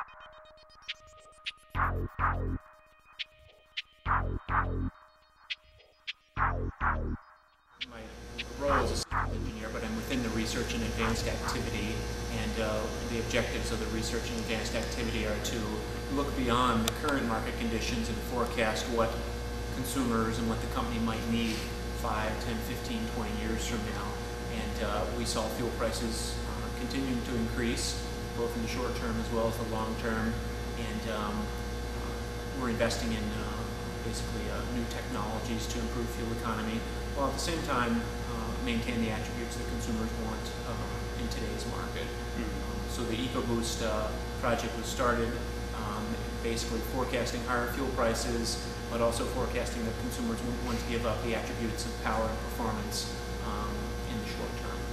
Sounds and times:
Speech: 0:07.8 - 0:31.5, 0:32.6 - 0:54.9.

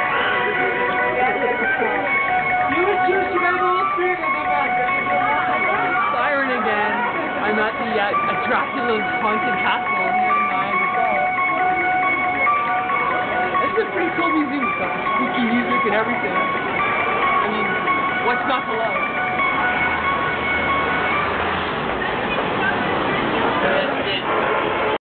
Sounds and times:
Music: 0:00.0 - 0:21.0.

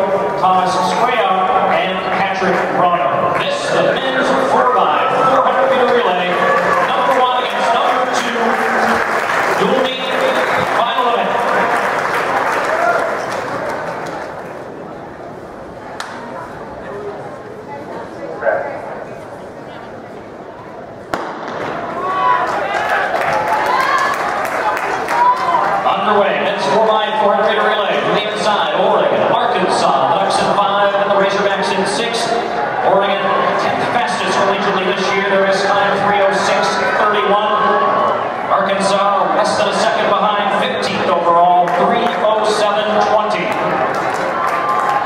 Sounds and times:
Speech: 0:00.0 - 0:09.0, 0:09.6 - 0:11.5, 0:25.8 - 0:43.7
Outside, urban or manmade: 0:12.2 - 0:23.0.

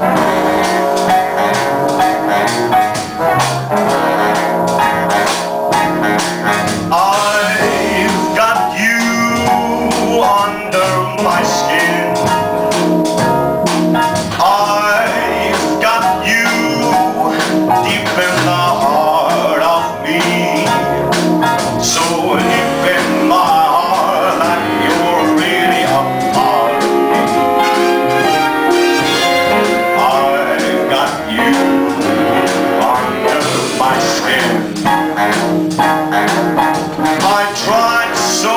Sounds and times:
Music: 0:00.0 - 0:38.5
Male singing: 0:06.9 - 0:12.4, 0:14.3 - 0:20.9, 0:21.8 - 0:34.8, 0:37.2 - 0:38.5.

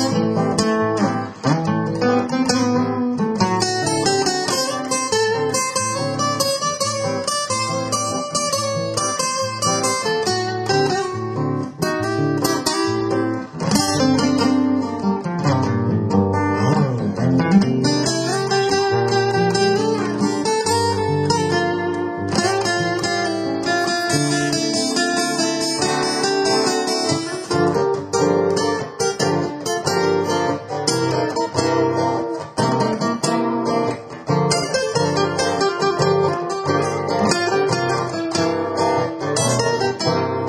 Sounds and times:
Blues: 0:00.0 - 0:40.4.

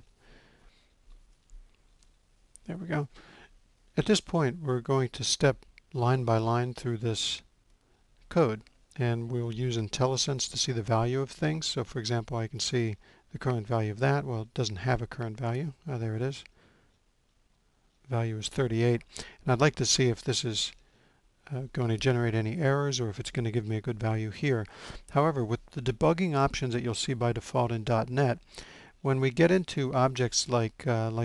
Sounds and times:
Speech: 0:02.6 - 0:03.1, 0:03.9 - 0:07.5, 0:08.3 - 0:16.5, 0:18.1 - 0:20.8, 0:21.4 - 0:28.4, 0:29.0 - 0:31.2.

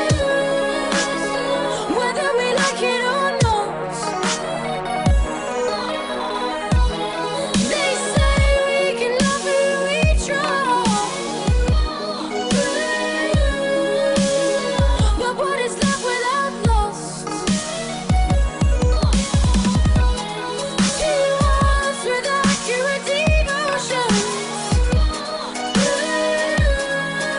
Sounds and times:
Music: 0:00.0 - 0:27.3.

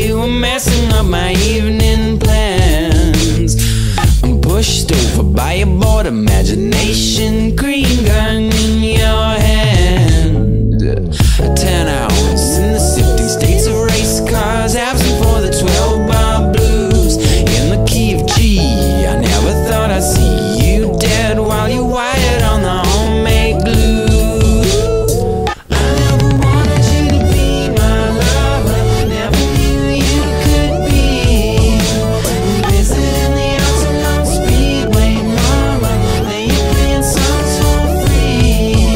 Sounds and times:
Music: 0:00.0 - 0:38.9.

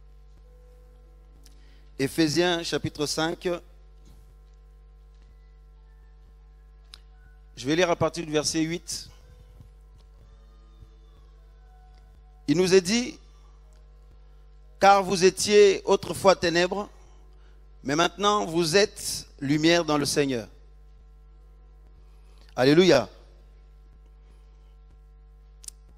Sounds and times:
Speech: 0:02.0 - 0:03.7, 0:07.6 - 0:09.1, 0:12.5 - 0:13.2, 0:14.8 - 0:16.9, 0:17.8 - 0:20.6, 0:22.6 - 0:23.2.

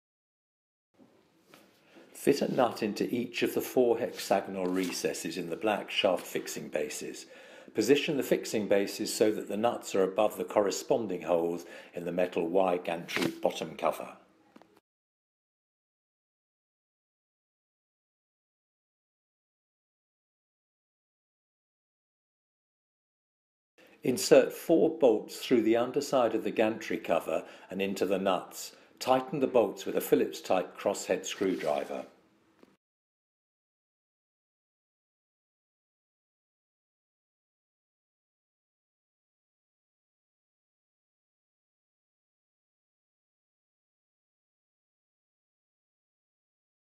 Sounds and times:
Speech: 0:02.2 - 0:14.3, 0:24.0 - 0:32.2.

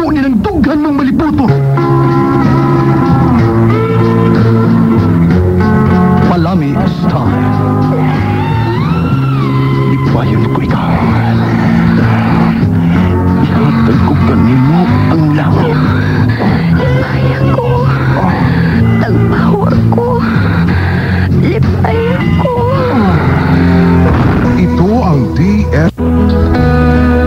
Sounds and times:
Speech: 0:00.0 - 0:01.6, 0:06.2 - 0:07.4, 0:09.9 - 0:11.4, 0:13.4 - 0:20.3, 0:24.6 - 0:26.0
Music: 0:00.0 - 0:27.2
Radio: 0:09.9 - 0:18.6.

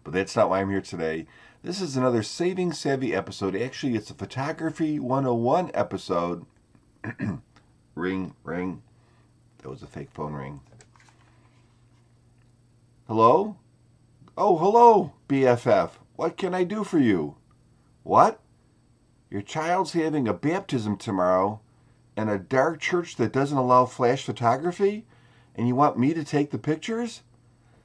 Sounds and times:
Speech: 0:00.0 - 0:07.4, 0:08.0 - 0:08.8, 0:09.6 - 0:10.6, 0:13.1 - 0:13.6, 0:14.3 - 0:17.4, 0:18.1 - 0:18.4, 0:19.3 - 0:21.6, 0:22.2 - 0:27.3.

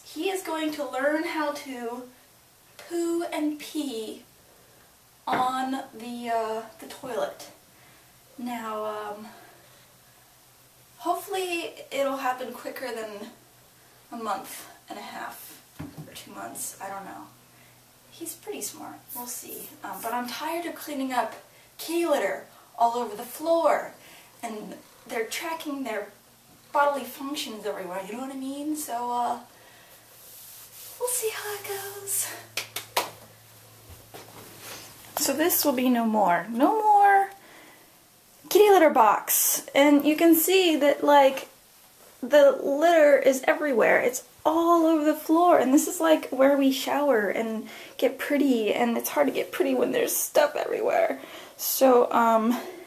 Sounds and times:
Speech: 0:00.0 - 0:02.2, 0:02.8 - 0:04.3, 0:05.3 - 0:07.6, 0:08.4 - 0:09.5, 0:11.0 - 0:13.4, 0:14.1 - 0:17.4, 0:18.1 - 0:29.5, 0:31.0 - 0:32.5, 0:35.2 - 0:37.4, 0:38.5 - 0:41.6, 0:42.2 - 0:52.8.

